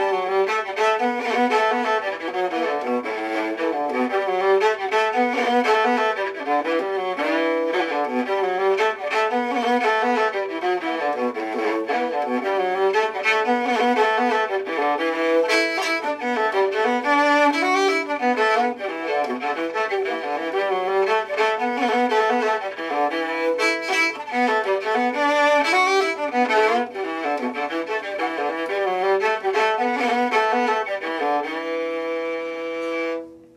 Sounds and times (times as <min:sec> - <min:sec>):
Violin, fiddle: 0:00.0 - 0:33.5.